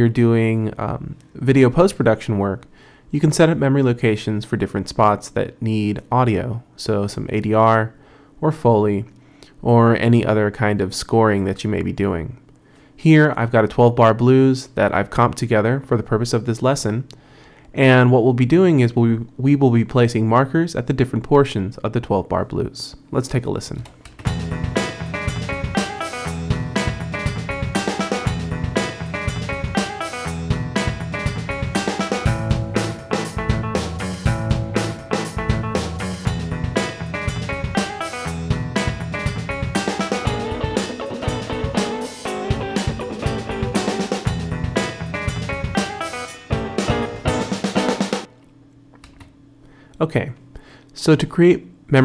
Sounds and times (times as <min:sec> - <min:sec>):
Speech: 0:00.0 - 0:12.4, 0:13.0 - 0:17.1, 0:17.8 - 0:23.9, 0:50.0 - 0:50.4, 0:51.0 - 0:52.0.